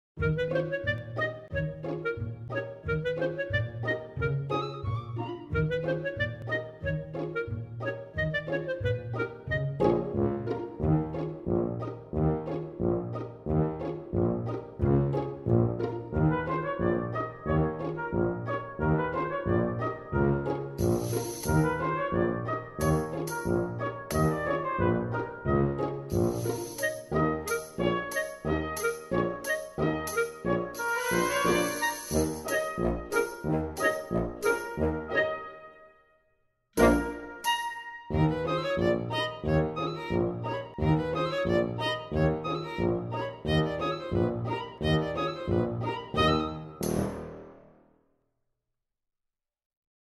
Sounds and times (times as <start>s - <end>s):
Music: 0.2s - 48.3s.